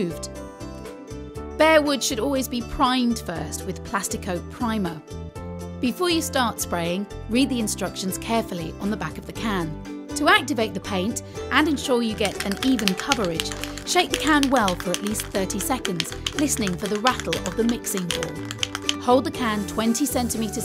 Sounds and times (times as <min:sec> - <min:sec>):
Speech: 0:00.0 - 0:00.3, 0:01.6 - 0:05.0, 0:05.8 - 0:18.4, 0:19.0 - 0:20.6
Music: 0:00.0 - 0:20.6.